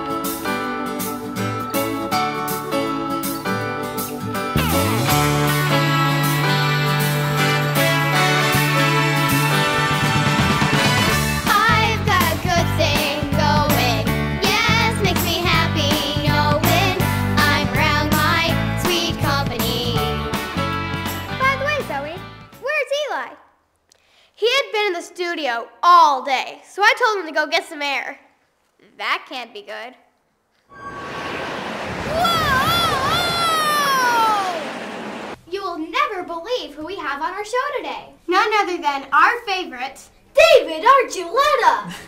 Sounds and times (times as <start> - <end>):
Speech: 21.4 - 23.4, 24.4 - 28.2, 28.8 - 30.0, 35.5 - 41.9.